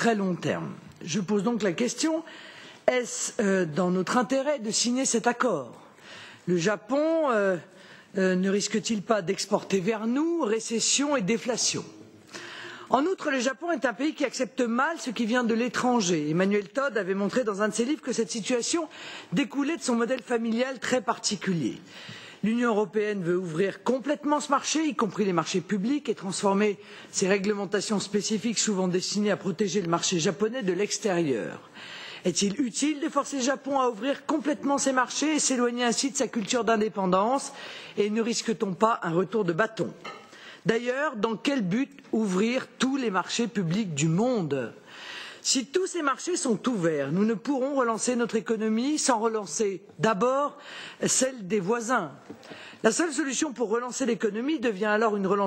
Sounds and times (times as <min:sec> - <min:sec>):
Speech: 0:00.0 - 0:02.3, 0:02.9 - 0:05.8, 0:06.5 - 0:12.0, 0:12.9 - 0:21.8, 0:22.4 - 0:31.6, 0:32.2 - 0:40.0, 0:40.7 - 0:44.8, 0:45.5 - 0:52.2, 0:52.8 - 0:55.4.